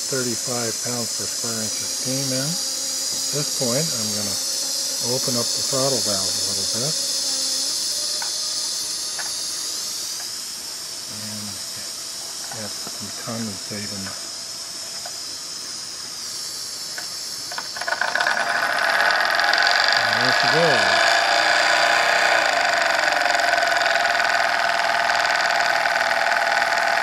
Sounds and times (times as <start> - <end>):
Hiss: 0.0 - 27.0.